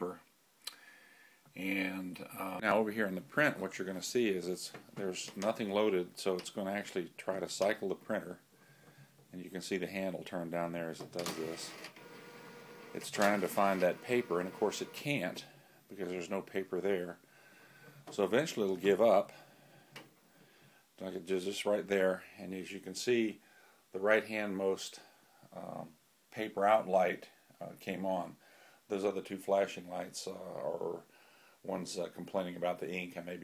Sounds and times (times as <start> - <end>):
Speech: 0.0 - 0.3, 1.6 - 8.4, 9.3 - 11.8, 13.0 - 17.2, 18.1 - 19.4, 21.0 - 23.4, 24.0 - 33.4
Inside, small room: 0.0 - 33.4
Printer: 11.2 - 15.2.